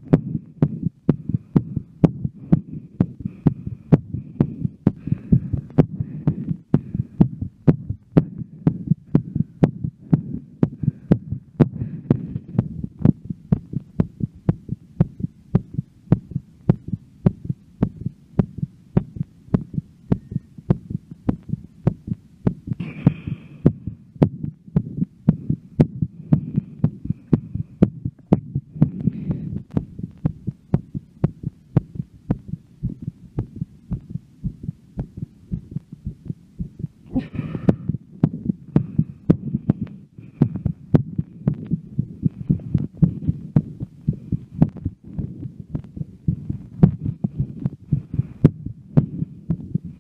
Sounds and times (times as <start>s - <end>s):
Heart sounds, heartbeat: 0.0s - 50.0s
Hum: 0.0s - 50.0s.